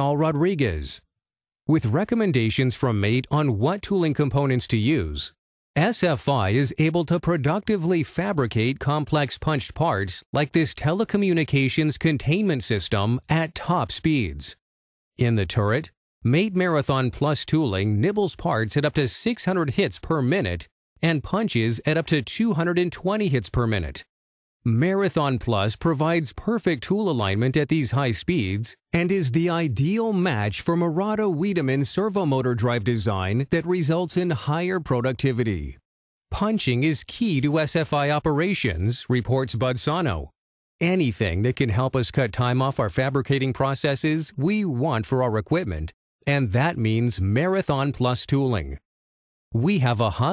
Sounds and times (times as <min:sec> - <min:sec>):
Speech synthesizer: 0:00.0 - 0:01.0, 0:01.7 - 0:14.6, 0:15.2 - 0:24.1, 0:24.7 - 0:35.8, 0:36.4 - 0:48.8, 0:49.6 - 0:50.3.